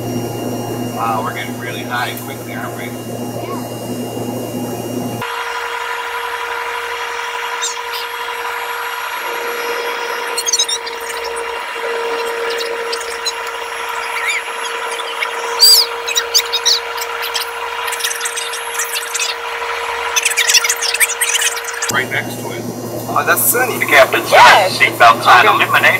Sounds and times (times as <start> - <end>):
Aircraft: 0.0 - 25.9.